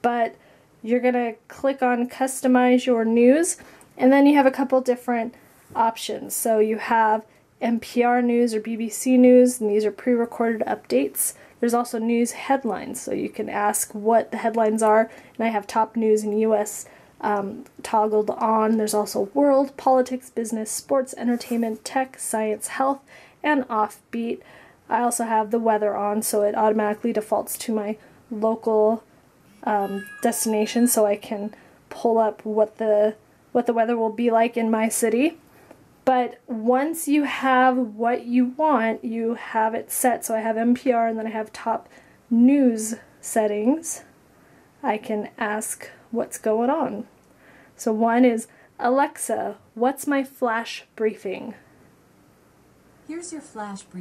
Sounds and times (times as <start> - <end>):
Speech: 0.0 - 29.0, 29.6 - 35.4, 36.1 - 44.1, 44.8 - 47.1, 47.8 - 51.6, 53.1 - 54.0.